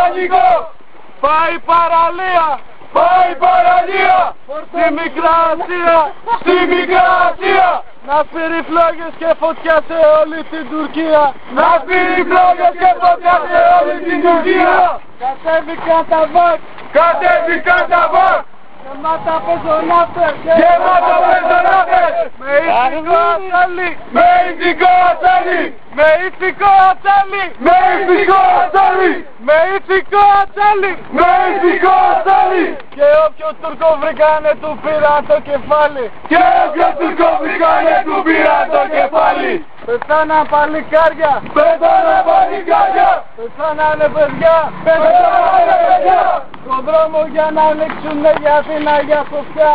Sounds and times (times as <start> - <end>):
Speech: 0.0 - 2.6, 4.5 - 6.5, 8.1 - 11.8, 18.8 - 21.0, 22.2 - 24.0, 26.0 - 27.6, 28.3 - 31.0, 33.0 - 36.1, 39.9 - 41.7, 43.4 - 45.2, 46.6 - 49.7.